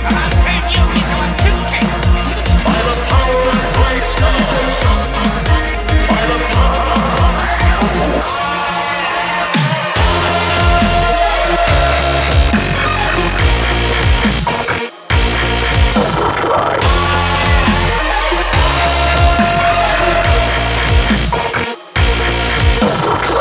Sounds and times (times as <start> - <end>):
Dubstep: 0.0 - 23.4.